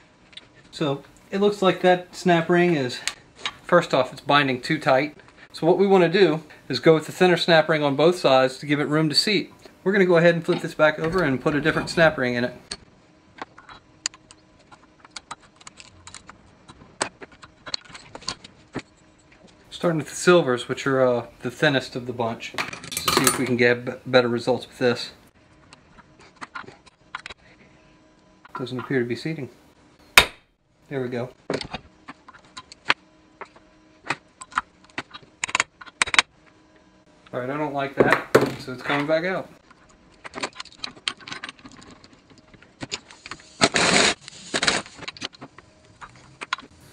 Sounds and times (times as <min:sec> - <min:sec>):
Speech: 0:00.7 - 0:03.1, 0:03.7 - 0:12.6, 0:19.7 - 0:25.2, 0:28.6 - 0:29.6, 0:30.9 - 0:31.4, 0:37.3 - 0:39.6.